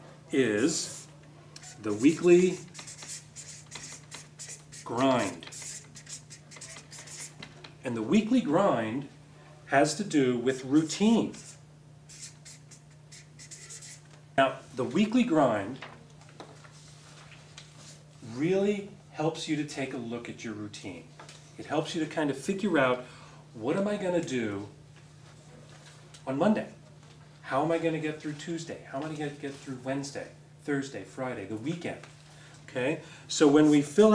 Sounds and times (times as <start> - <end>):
Speech: 7.9 - 9.1, 9.7 - 11.4, 14.4 - 15.8, 18.3 - 23.0, 23.6 - 24.8, 26.3 - 26.8, 27.5 - 32.1, 32.7 - 34.1.